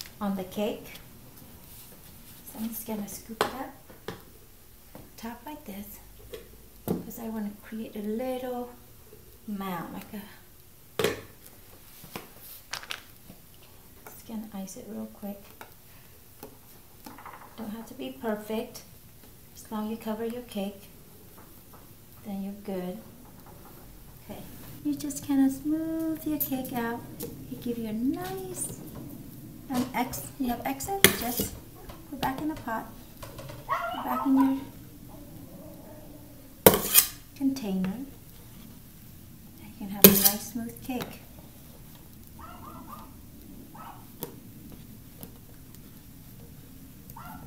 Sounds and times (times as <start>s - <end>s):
Inside, small room: 0.0s - 47.4s
Speech: 0.2s - 1.0s, 2.5s - 3.8s, 17.6s - 18.9s, 19.6s - 20.9s, 22.2s - 23.1s, 24.2s - 28.8s, 29.7s - 33.0s, 33.9s - 34.8s, 37.4s - 38.2s, 39.6s - 41.2s.